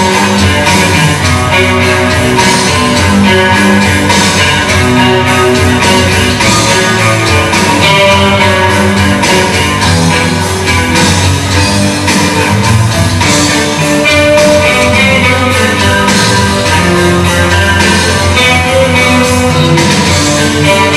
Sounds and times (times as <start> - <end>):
Acoustic guitar: 0.0 - 20.9
Electric guitar: 0.0 - 20.9.